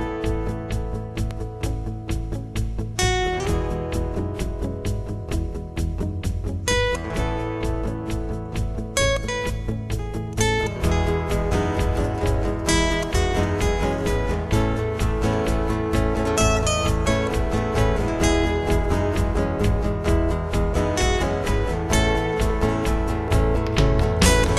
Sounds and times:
Electric guitar: 0.0s - 24.5s
Strum: 0.0s - 24.5s.

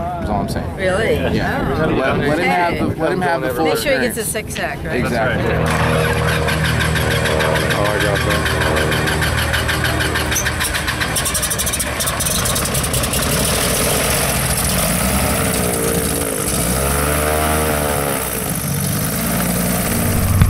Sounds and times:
Aircraft: 4.8s - 20.5s
Speech: 7.6s - 8.5s.

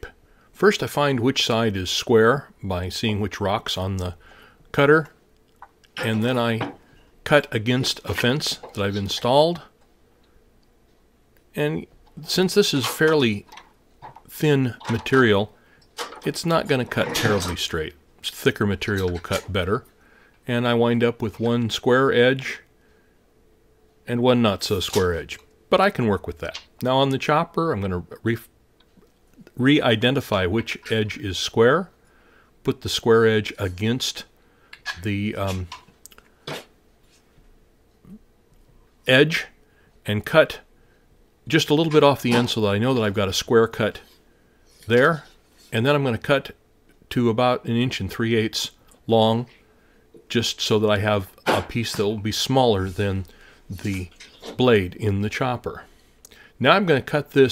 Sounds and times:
Speech: 0.0s - 5.2s, 6.0s - 9.8s, 11.5s - 13.6s, 14.3s - 15.6s, 16.2s - 22.7s, 24.0s - 28.5s, 29.4s - 32.0s, 32.6s - 35.8s, 39.0s - 40.7s, 41.5s - 44.2s, 44.8s - 49.6s, 50.3s - 55.9s, 56.6s - 57.5s.

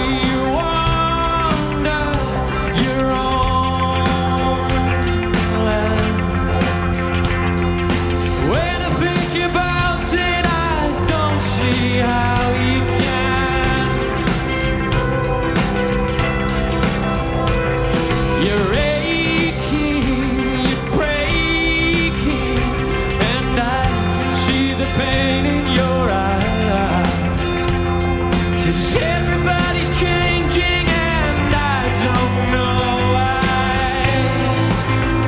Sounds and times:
Singing: 0.0s - 6.5s, 18.4s - 27.6s, 28.6s - 35.2s
Music: 0.0s - 35.2s.

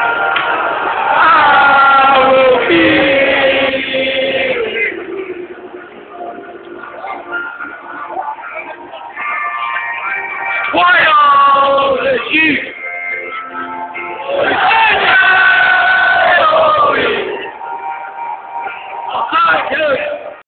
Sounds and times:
Music: 0.0s - 20.4s
Speech: 19.1s - 20.3s.

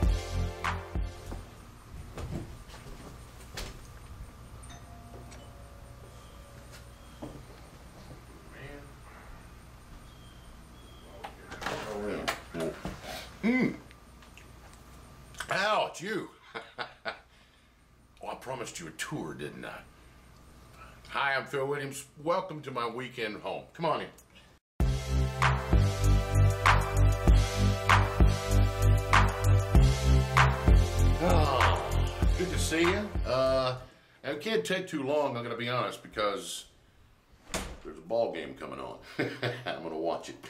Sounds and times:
Music: 0.0s - 1.6s, 24.8s - 33.7s
Speech: 8.5s - 9.0s, 11.1s - 12.8s, 15.4s - 16.4s, 18.2s - 19.9s, 21.1s - 24.2s, 31.2s - 36.7s, 37.8s - 40.4s.

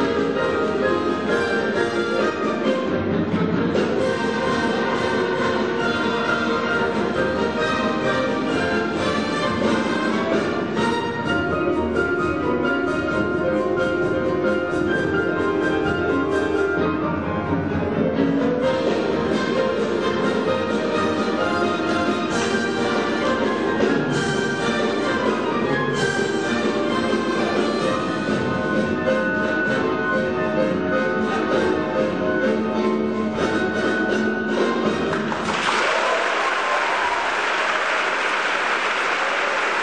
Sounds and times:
Orchestra: 0.0s - 39.8s.

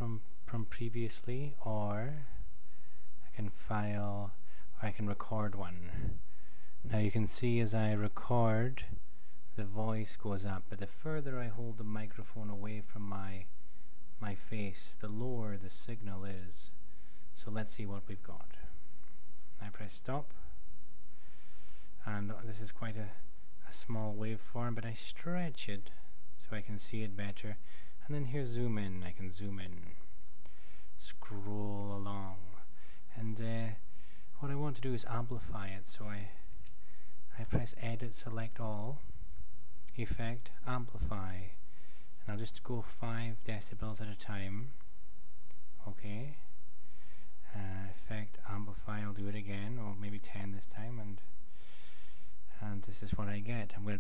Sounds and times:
Speech: 0.0s - 2.4s, 3.2s - 6.2s, 6.8s - 13.6s, 14.2s - 16.8s, 17.4s - 18.8s, 19.6s - 20.6s, 22.0s - 30.1s, 31.0s - 36.5s, 37.3s - 39.1s, 39.8s - 41.6s, 42.2s - 44.8s, 45.8s - 46.5s, 47.4s - 51.3s, 52.5s - 54.0s.

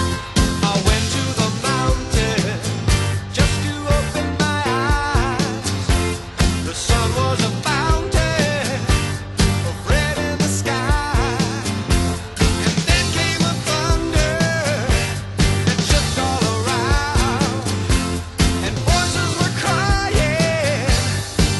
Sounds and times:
Music: 0.0s - 21.5s.

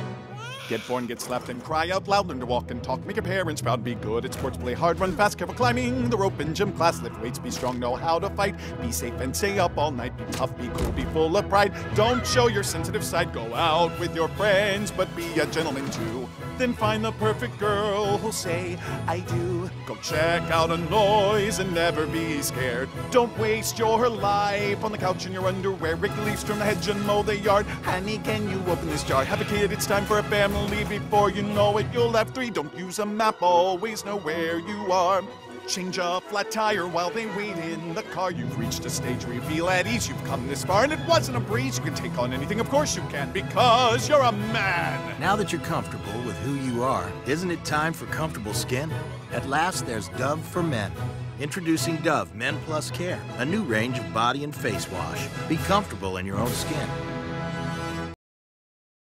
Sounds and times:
Music: 0.0s - 58.2s.

